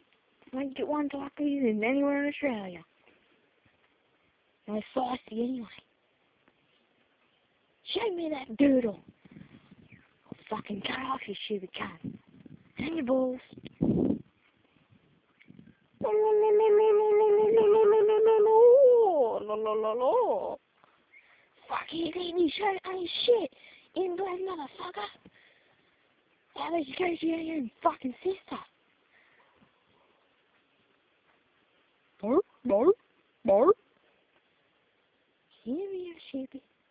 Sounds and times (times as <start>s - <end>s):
Speech: 0.5s - 2.9s, 4.6s - 5.9s, 7.8s - 9.1s, 10.3s - 12.2s, 12.8s - 13.6s, 16.0s - 20.6s, 21.6s - 25.2s, 26.5s - 28.7s, 32.2s - 33.8s, 35.5s - 36.7s.